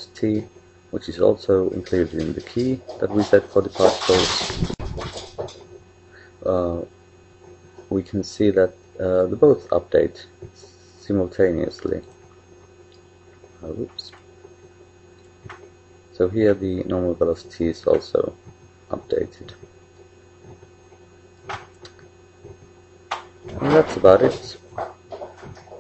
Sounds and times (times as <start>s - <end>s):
Speech: 0.0s - 4.6s, 6.4s - 6.9s, 7.9s - 12.1s, 13.6s - 14.2s, 16.2s - 19.6s, 23.5s - 24.6s.